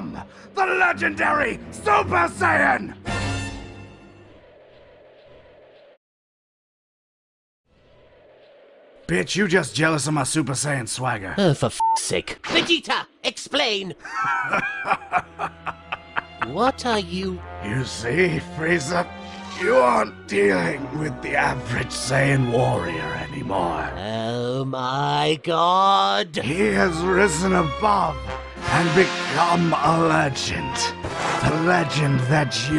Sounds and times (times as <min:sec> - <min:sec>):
Male speech, man speaking: 0:00.0 - 0:03.0, 0:09.1 - 0:12.6, 0:16.4 - 0:32.7
Conversation: 0:00.0 - 0:03.5, 0:09.1 - 0:32.7.